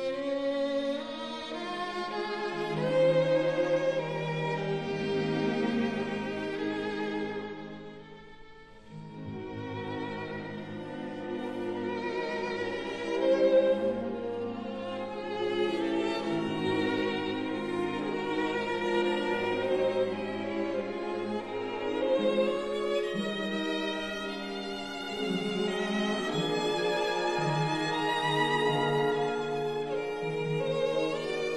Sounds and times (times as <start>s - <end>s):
Violin, fiddle: 0.0s - 31.5s.